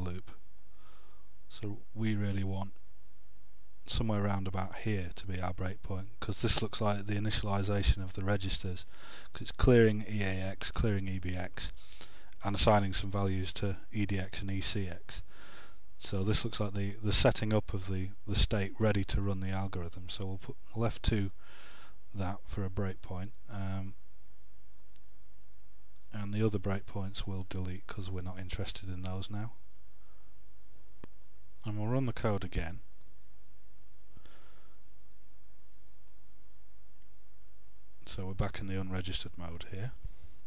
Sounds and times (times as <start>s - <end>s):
Speech: 0.0s - 0.4s, 1.5s - 2.8s, 3.9s - 11.8s, 12.4s - 15.3s, 16.0s - 21.4s, 22.2s - 24.0s, 26.1s - 29.6s, 31.6s - 32.8s, 38.0s - 40.0s.